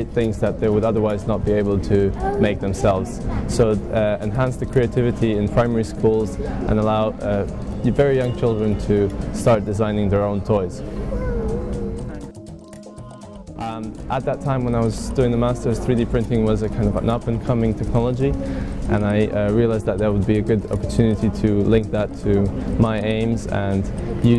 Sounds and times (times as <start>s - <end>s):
Speech: 0.0s - 10.7s, 18.9s - 24.3s
Music: 0.0s - 24.3s.